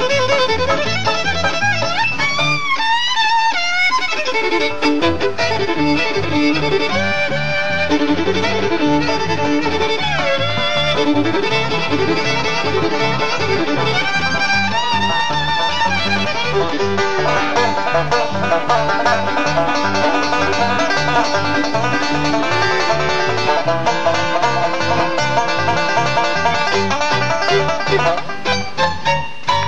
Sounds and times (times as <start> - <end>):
Banjo: 0.0 - 29.6.